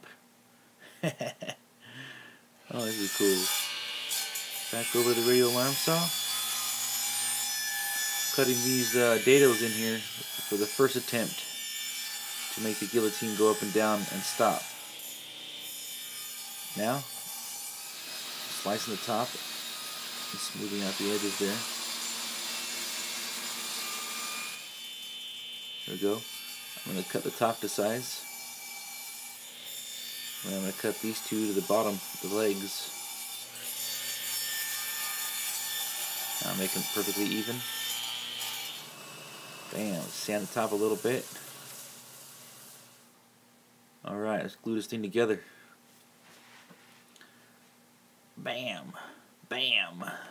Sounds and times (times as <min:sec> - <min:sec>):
Power tool: 0:02.7 - 0:43.1.